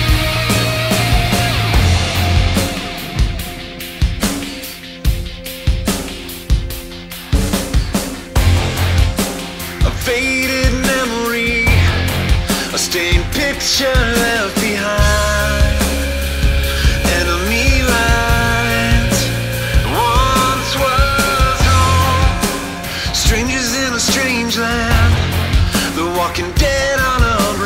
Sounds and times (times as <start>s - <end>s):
Soul music: 0.0s - 27.6s.